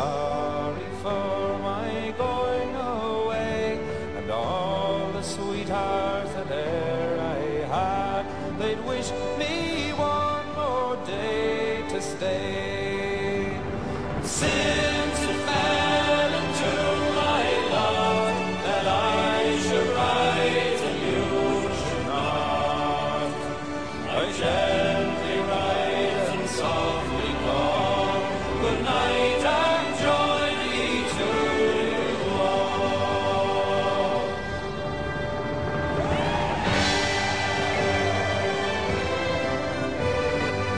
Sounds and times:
Music: 0:00.0 - 0:40.7.

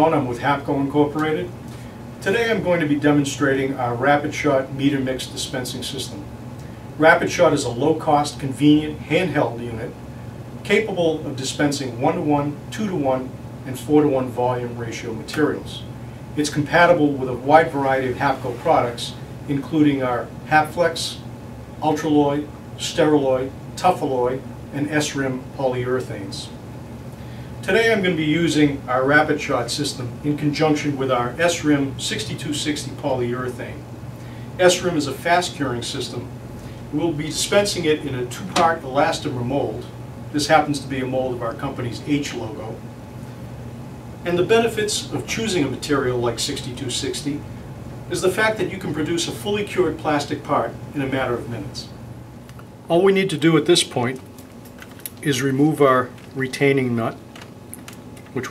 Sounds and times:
Speech: 0:00.0 - 0:01.6, 0:02.2 - 0:06.3, 0:07.0 - 0:10.0, 0:10.6 - 0:26.6, 0:27.6 - 0:33.8, 0:34.6 - 0:36.3, 0:36.9 - 0:42.8, 0:44.2 - 0:47.4, 0:48.1 - 0:52.0, 0:52.9 - 0:54.2, 0:55.2 - 0:57.2.

